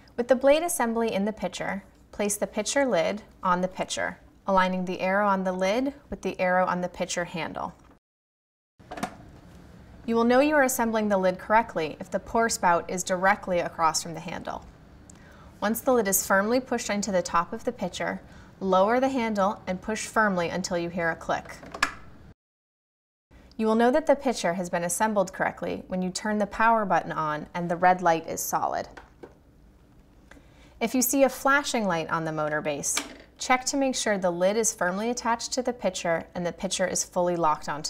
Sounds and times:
Speech: 0.2 - 7.8, 10.1 - 14.7, 15.6 - 21.6, 23.6 - 29.0, 30.8 - 37.8.

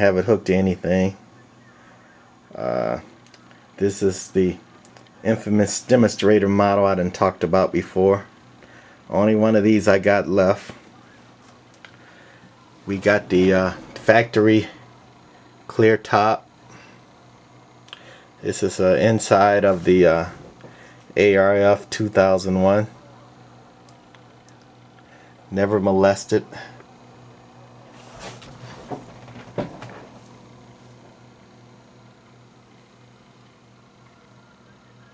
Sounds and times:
Speech: 0.0 - 1.8, 2.4 - 8.3, 9.1 - 11.2, 12.8 - 14.8, 15.7 - 16.5, 18.4 - 20.4, 21.1 - 23.5, 25.5 - 26.8
Radio: 0.0 - 24.4, 25.0 - 26.9, 33.6 - 35.1.

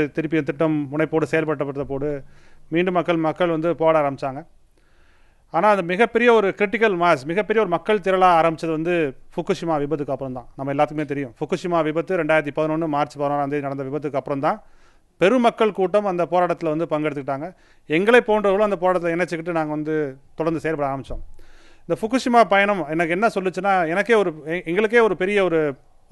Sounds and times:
Male speech, man speaking: 0.0 - 2.2, 2.8 - 4.5, 5.6 - 14.6, 15.2 - 21.2, 21.9 - 26.1
Narration, monologue: 0.0 - 26.1.

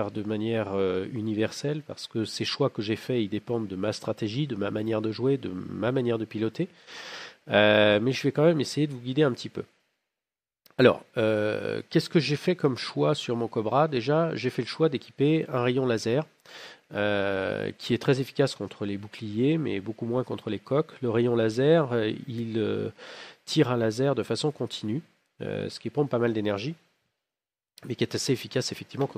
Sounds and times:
Speech: 0.0 - 6.7, 7.5 - 9.7, 10.8 - 16.3, 16.9 - 26.8, 27.8 - 29.1.

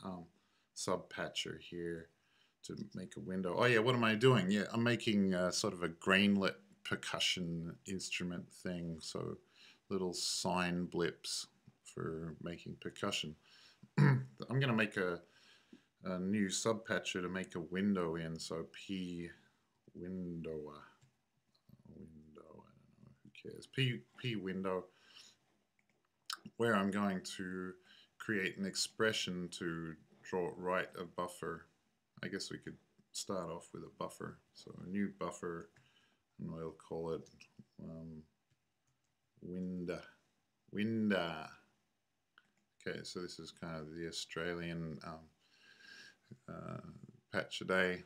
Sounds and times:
Speech: 0.0 - 13.4, 14.0 - 15.2, 16.0 - 19.4, 20.0 - 20.9, 21.9 - 22.7, 23.4 - 24.9, 26.3 - 35.7, 36.4 - 38.3, 39.4 - 40.1, 40.8 - 41.6, 42.8 - 45.3, 46.4 - 48.0.

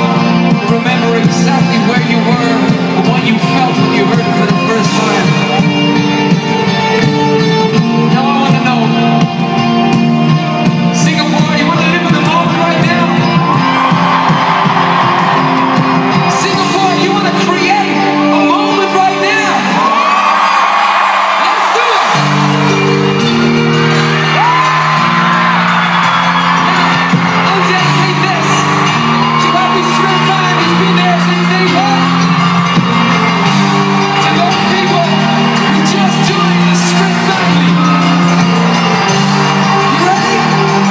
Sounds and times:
Inside, large room or hall: 0.0 - 40.9
Music: 0.0 - 40.9
Speech: 0.7 - 5.3, 11.0 - 13.2, 16.3 - 19.7, 27.4 - 28.6, 29.4 - 32.0.

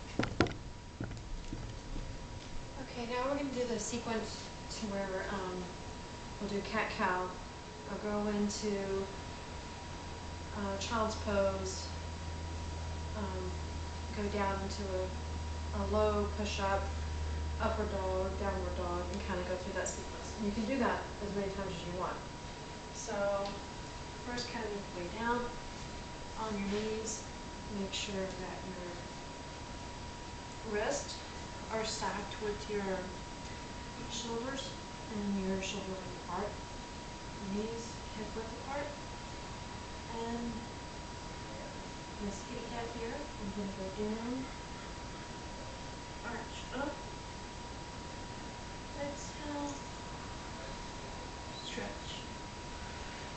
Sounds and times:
Speech: 2.8 - 5.8, 6.4 - 9.2, 10.5 - 12.0, 13.2 - 15.2, 15.8 - 17.0, 17.6 - 22.3, 23.0 - 23.6, 24.2 - 25.6, 26.4 - 29.1, 30.6 - 33.2, 34.0 - 36.6, 37.4 - 39.0, 40.1 - 40.7, 41.5 - 44.6, 46.2 - 47.1, 49.0 - 49.8, 51.6 - 52.4.

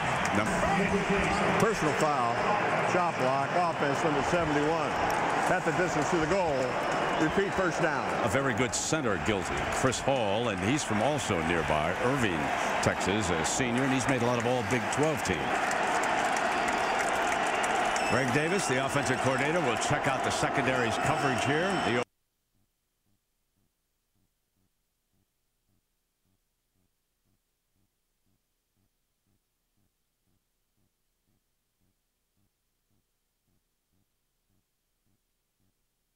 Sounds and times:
Speech: 0.3 - 15.6, 18.1 - 22.1.

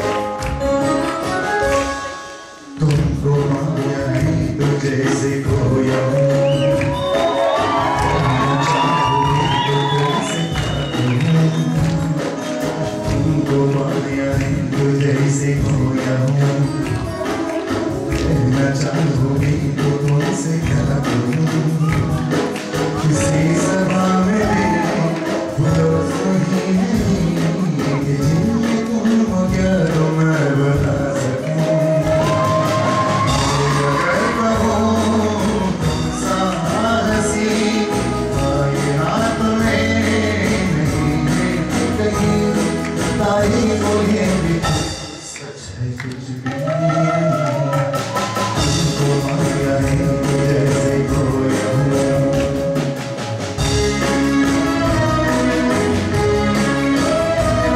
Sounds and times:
Music: 0.0 - 57.7
Male singing: 2.8 - 48.0, 48.6 - 53.0, 54.3 - 57.7.

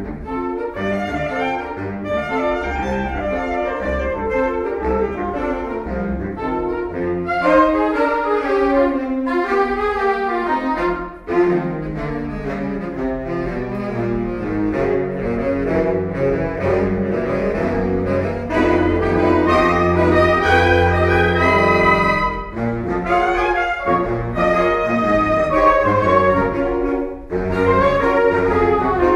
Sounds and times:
Brass instrument: 0.0 - 29.1
Classical music: 0.0 - 29.1
Inside, large room or hall: 0.0 - 29.1
Orchestra: 0.0 - 29.1
Saxophone: 0.0 - 29.1.

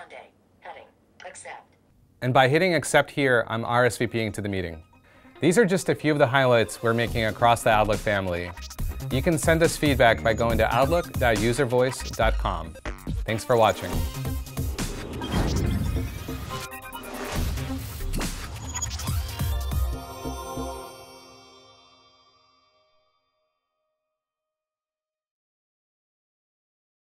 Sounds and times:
Music: 2.8 - 24.9.

